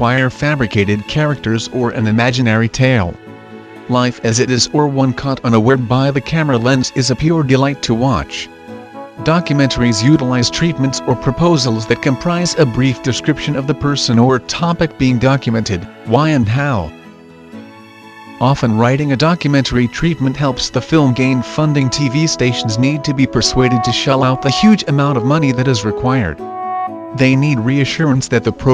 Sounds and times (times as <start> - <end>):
Speech: 0.0 - 3.2, 3.9 - 8.5, 9.2 - 17.0, 18.4 - 26.4, 27.2 - 28.7
Music: 0.0 - 28.7.